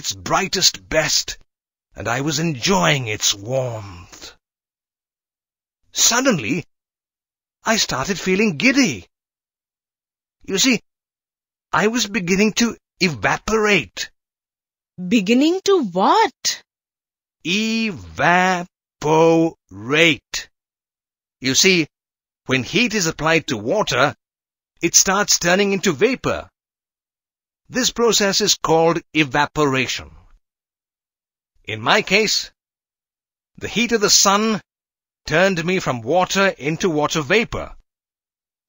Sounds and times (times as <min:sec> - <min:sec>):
Speech synthesizer: 0:00.0 - 0:01.4, 0:02.0 - 0:04.4, 0:06.0 - 0:06.7, 0:07.7 - 0:09.1, 0:10.5 - 0:10.8, 0:11.8 - 0:14.1, 0:15.0 - 0:16.6, 0:17.5 - 0:20.5, 0:21.4 - 0:21.9, 0:22.5 - 0:24.2, 0:24.8 - 0:26.5, 0:27.7 - 0:30.2, 0:31.7 - 0:32.5, 0:33.6 - 0:34.6, 0:35.3 - 0:37.8.